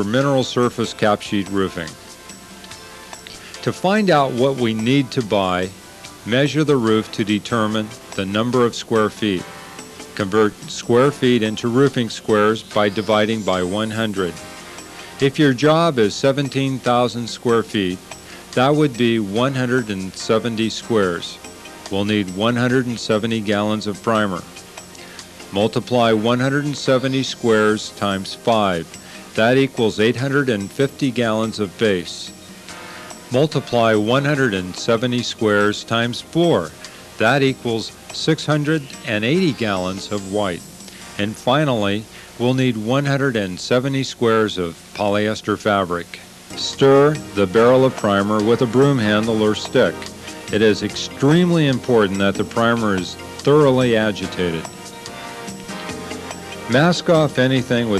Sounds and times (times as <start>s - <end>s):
Speech: 0.0s - 2.0s, 3.6s - 9.5s, 10.2s - 14.4s, 15.2s - 18.0s, 18.6s - 24.5s, 25.6s - 32.4s, 33.3s - 40.6s, 41.2s - 54.7s, 56.7s - 57.9s
Music: 0.0s - 57.9s.